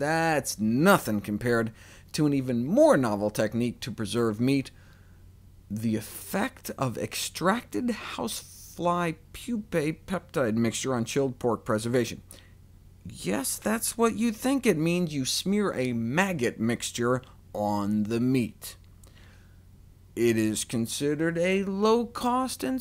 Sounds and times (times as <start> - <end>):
Speech: 0.0 - 4.7, 5.7 - 12.2, 13.1 - 18.8, 20.2 - 22.8.